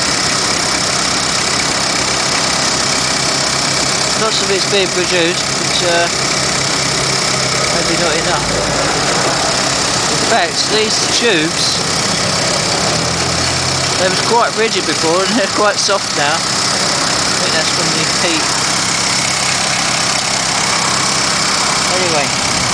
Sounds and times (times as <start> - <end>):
Vehicle: 0.0 - 22.7
Speech: 4.2 - 6.2, 10.2 - 11.8, 14.0 - 16.4, 17.4 - 18.5, 21.9 - 22.4.